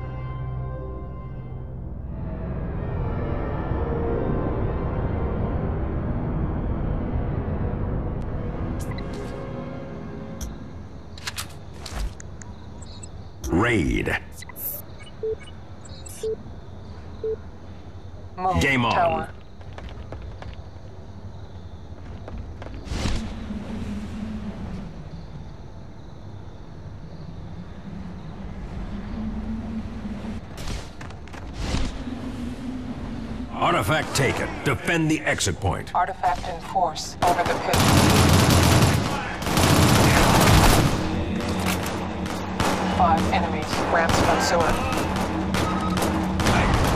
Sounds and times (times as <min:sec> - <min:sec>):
Speech: 0:13.5 - 0:14.3.